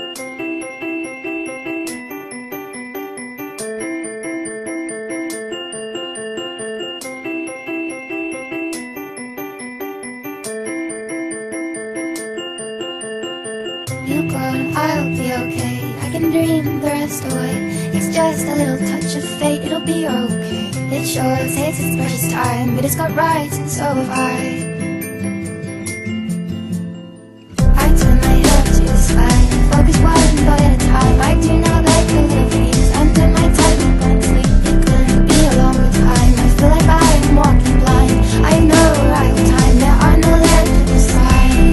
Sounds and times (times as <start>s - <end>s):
Electronic music: 0.0s - 41.7s.